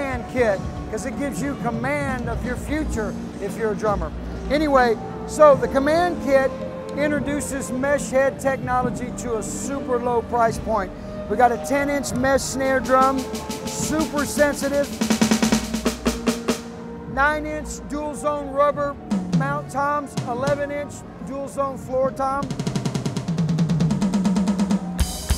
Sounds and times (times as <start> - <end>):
Drum kit: 0.0 - 7.6, 11.7 - 17.8, 18.8 - 20.9, 22.0 - 25.3
Speech: 0.0 - 15.1, 17.1 - 22.5.